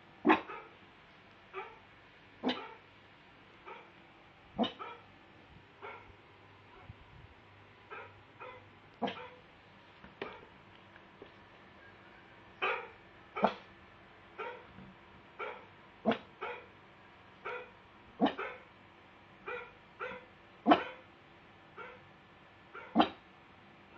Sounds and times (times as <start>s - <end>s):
Bow-wow: 0.2s - 0.8s, 1.5s - 1.8s, 2.4s - 2.8s, 3.7s - 3.9s, 4.6s - 5.1s, 5.8s - 6.1s, 7.9s - 9.4s, 12.6s - 13.7s, 14.4s - 14.7s, 15.4s - 16.7s, 17.4s - 18.7s, 19.4s - 21.1s, 21.8s - 22.1s, 22.7s - 23.2s
Yip: 0.2s - 0.8s, 1.5s - 1.8s, 2.4s - 2.8s, 3.7s - 3.9s, 4.6s - 5.1s, 5.8s - 6.1s, 7.9s - 9.4s, 12.6s - 13.7s, 14.4s - 14.7s, 15.4s - 16.7s, 17.4s - 18.7s, 19.4s - 21.1s, 21.8s - 22.1s, 22.7s - 23.2s.